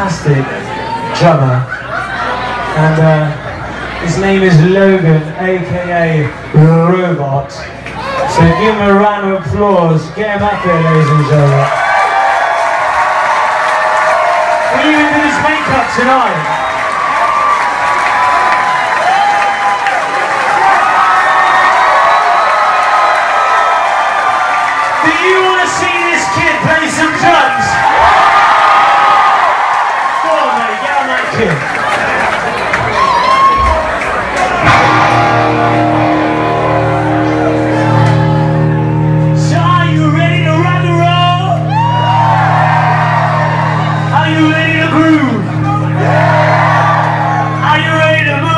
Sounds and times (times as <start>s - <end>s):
Speech: 0.0s - 0.6s, 2.8s - 3.4s, 4.0s - 7.7s, 8.3s - 11.7s, 14.7s - 16.4s, 25.0s - 27.8s, 47.6s - 48.5s.